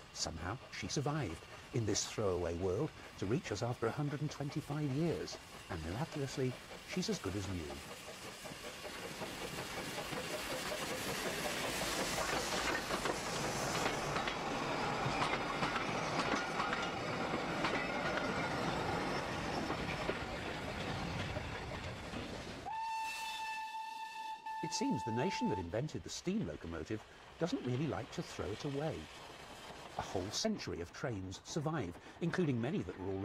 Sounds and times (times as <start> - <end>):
Speech: 0.2 - 7.8, 24.6 - 29.1, 30.0 - 33.2.